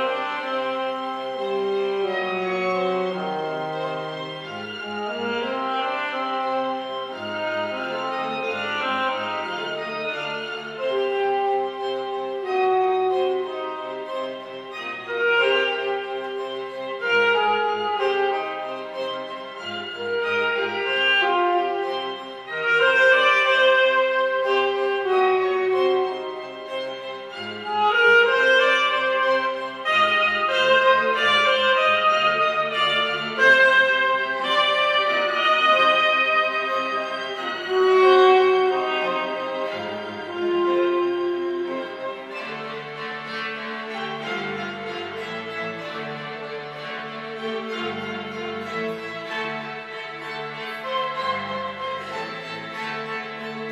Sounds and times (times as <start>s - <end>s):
Cello: 0.0s - 53.7s
Violin, fiddle: 0.0s - 53.7s.